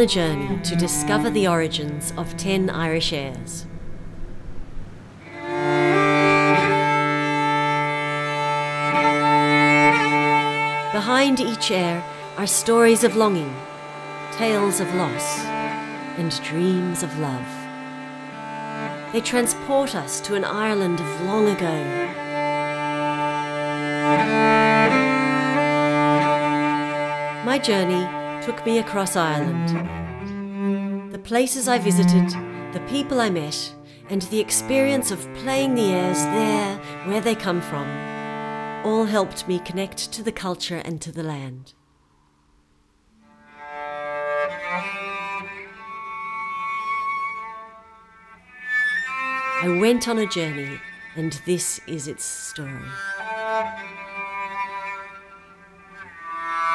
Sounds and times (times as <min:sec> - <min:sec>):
Speech: 0:00.0 - 0:03.7, 0:11.0 - 0:13.6, 0:14.4 - 0:15.5, 0:16.2 - 0:17.6, 0:19.1 - 0:22.0, 0:27.4 - 0:29.8, 0:31.1 - 0:38.0, 0:38.8 - 0:41.8, 0:49.6 - 0:53.0
Musical instrument: 0:00.0 - 0:30.3, 0:31.7 - 0:33.5.